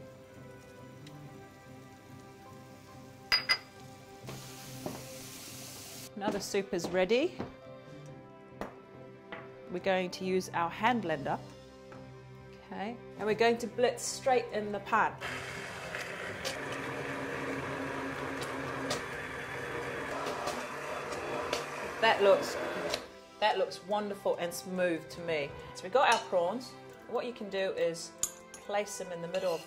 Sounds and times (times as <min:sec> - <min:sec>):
Speech: 0:06.2 - 0:07.4, 0:22.0 - 0:22.6, 0:23.4 - 0:28.1, 0:28.7 - 0:29.6
Blender: 0:15.2 - 0:23.1.